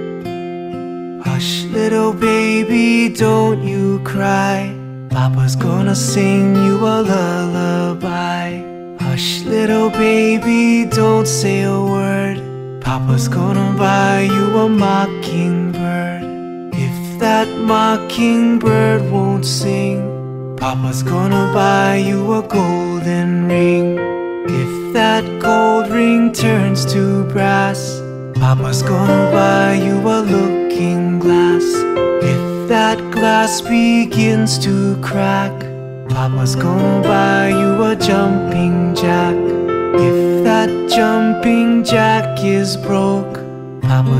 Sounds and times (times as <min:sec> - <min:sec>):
Music: 0:00.0 - 0:44.2.